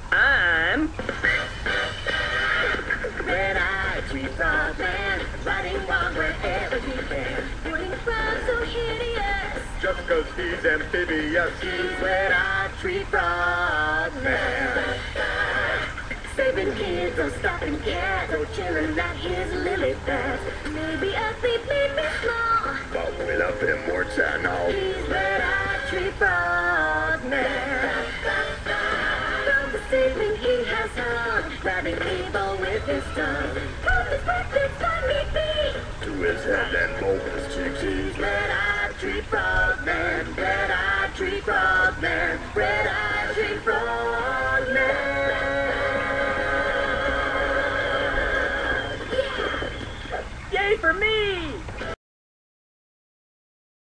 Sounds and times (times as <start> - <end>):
Music: 0.0 - 50.4, 51.6 - 52.0.